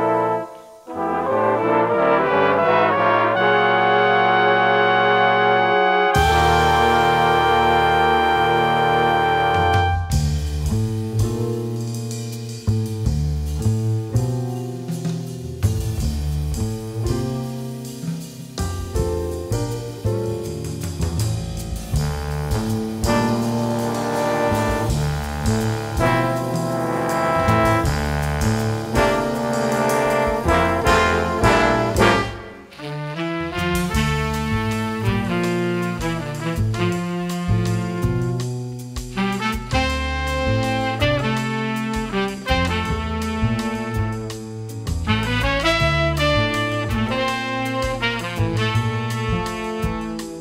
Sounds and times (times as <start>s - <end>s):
Music: 0.0s - 50.4s.